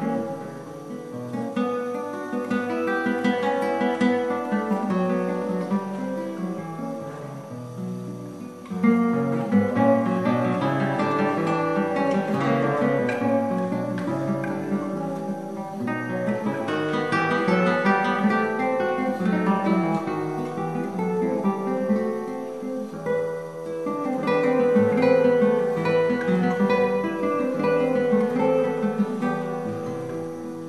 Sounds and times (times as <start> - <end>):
Acoustic guitar: 0.0 - 30.6
Strum: 0.0 - 30.6.